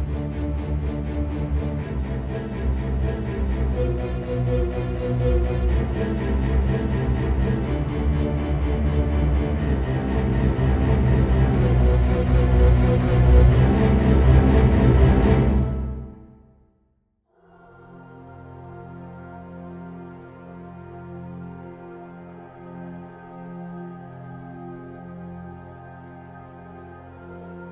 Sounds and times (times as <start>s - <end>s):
Ambient music: 0.0s - 16.7s, 17.4s - 27.7s.